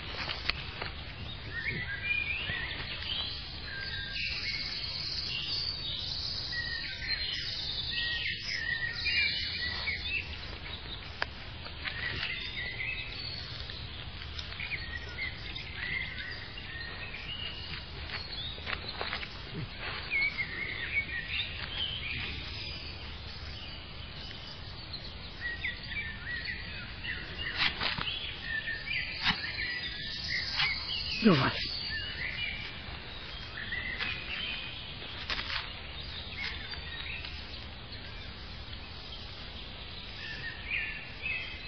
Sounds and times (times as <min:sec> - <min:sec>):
Walk, footsteps: 0:33.9 - 0:35.8.